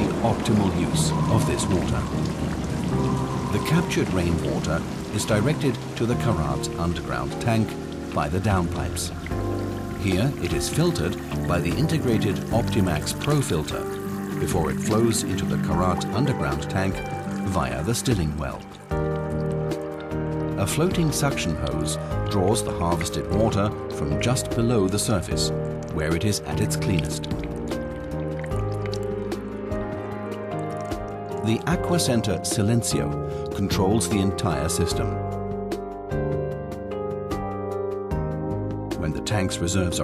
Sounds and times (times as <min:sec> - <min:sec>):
Speech: 0:00.0 - 0:02.1, 0:03.6 - 0:09.2, 0:10.0 - 0:18.7, 0:20.6 - 0:27.3, 0:31.4 - 0:35.2, 0:39.0 - 0:40.0
Music: 0:00.0 - 0:40.0.